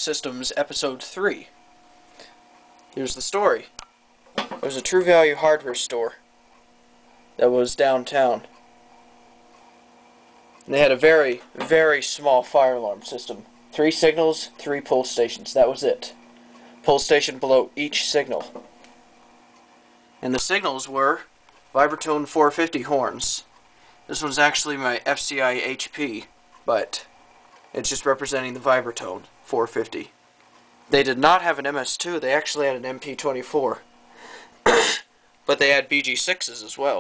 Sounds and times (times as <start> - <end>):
Speech: 0.0 - 1.6, 3.0 - 3.8, 4.6 - 6.2, 7.4 - 8.5, 10.6 - 16.2, 16.8 - 18.6, 20.2 - 23.5, 24.1 - 27.1, 27.8 - 30.2, 30.9 - 33.8, 35.5 - 37.0.